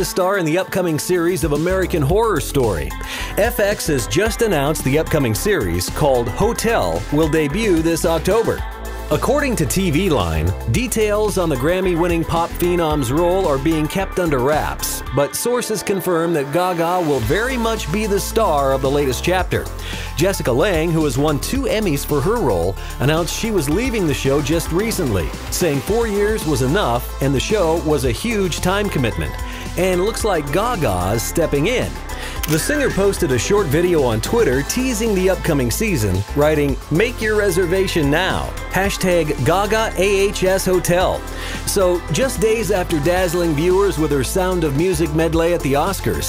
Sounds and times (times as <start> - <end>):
Music: 0.0 - 46.2
Speech: 0.0 - 46.2.